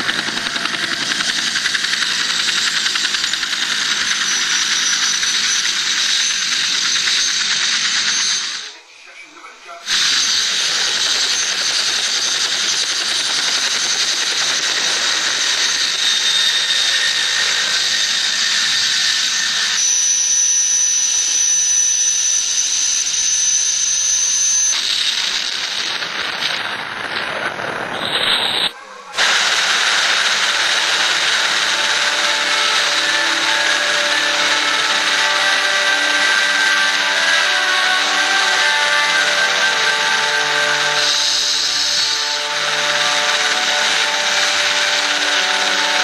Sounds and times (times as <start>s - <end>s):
Music: 30.4s - 46.0s.